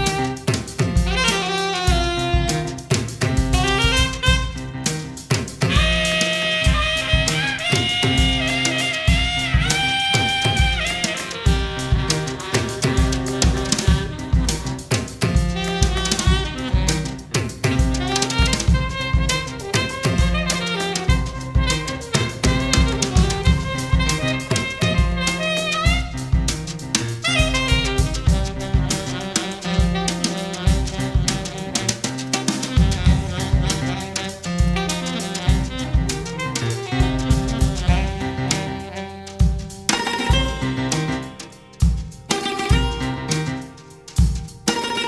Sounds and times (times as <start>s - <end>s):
Brass instrument: 0.0s - 45.0s
Saxophone: 0.0s - 45.0s.